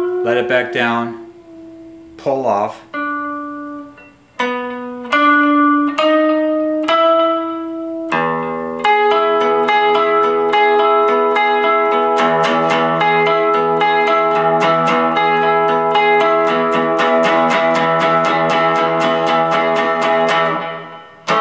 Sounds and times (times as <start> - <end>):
Guitar: 0.0 - 21.4
Inside, small room: 0.0 - 21.4.